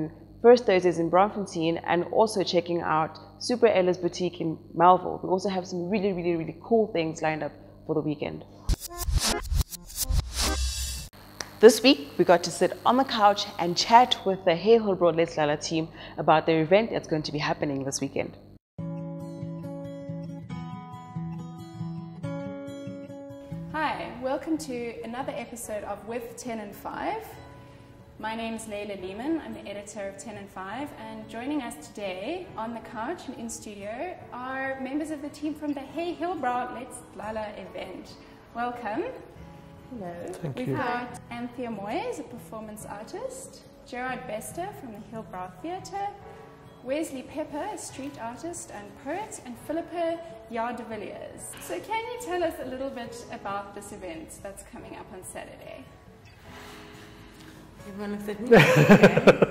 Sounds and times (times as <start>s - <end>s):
Music: 0.0s - 59.5s.